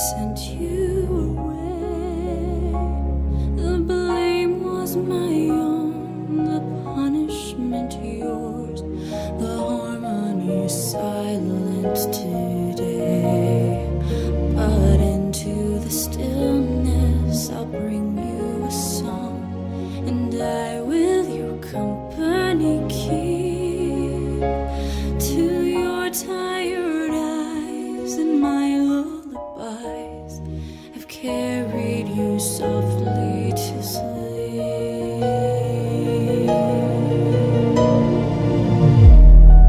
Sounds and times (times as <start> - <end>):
Lullaby: 0.0 - 38.9.